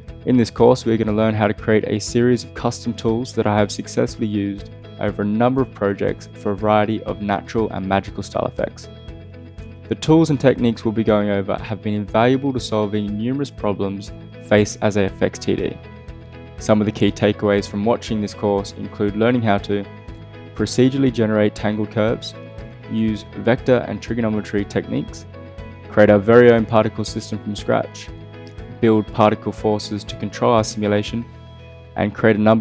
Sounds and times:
Music: 0.0 - 32.6
Speech: 0.3 - 8.9, 9.9 - 15.8, 16.6 - 19.9, 20.6 - 25.3, 25.9 - 28.1, 28.7 - 31.3, 32.0 - 32.6.

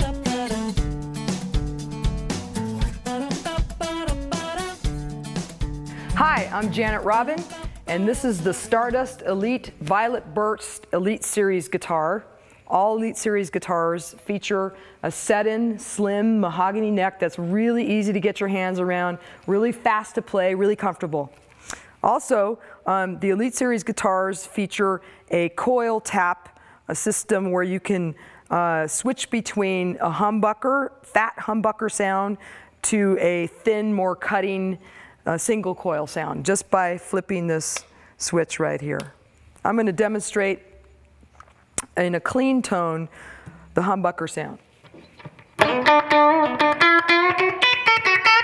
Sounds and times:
Speech: 6.2 - 21.3, 22.0 - 40.7, 41.9 - 43.1, 43.8 - 44.6.

